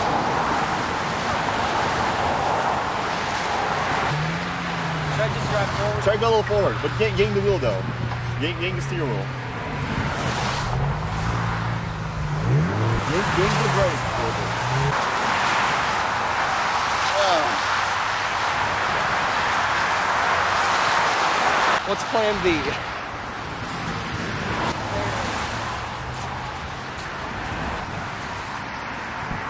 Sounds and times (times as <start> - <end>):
Vehicle: 0.0 - 29.5
Speech: 5.2 - 9.3, 13.1 - 14.5, 21.8 - 22.8.